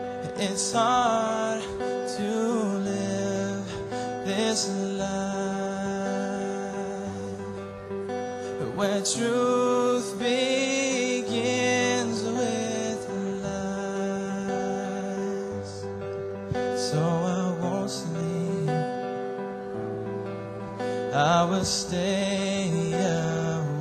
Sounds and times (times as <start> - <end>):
Music: 0.0 - 23.8.